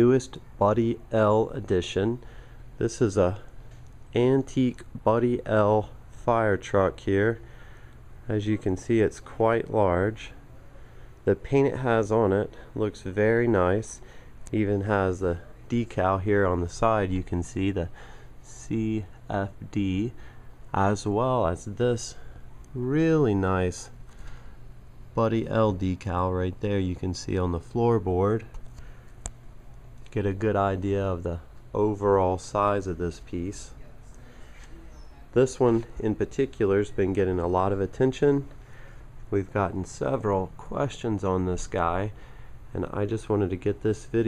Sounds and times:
Speech: 0.0s - 2.2s, 2.8s - 3.5s, 4.1s - 7.5s, 8.2s - 24.0s, 25.2s - 28.6s, 30.1s - 38.5s, 39.3s - 44.2s.

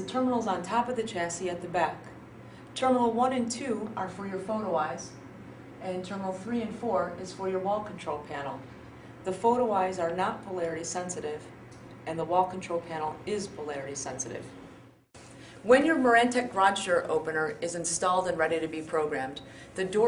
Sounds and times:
Speech: 0.0s - 2.1s, 2.8s - 5.2s, 5.8s - 8.6s, 9.3s - 14.5s, 15.6s - 20.0s.

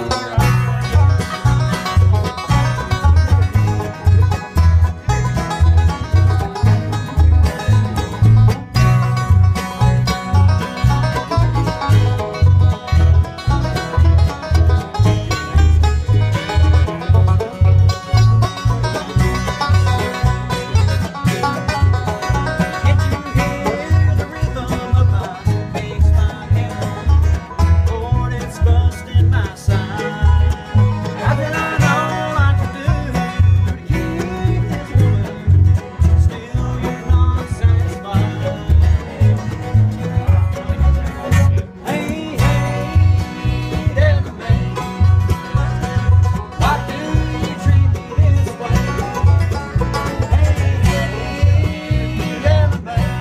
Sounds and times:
Banjo: 0.0s - 53.2s
Mandolin: 0.0s - 53.2s.

